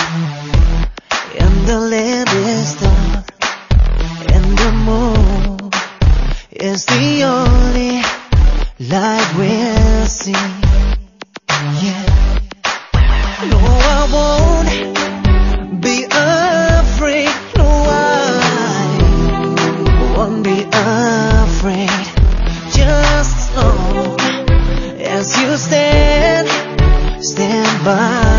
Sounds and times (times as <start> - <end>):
Music: 0.0 - 28.3.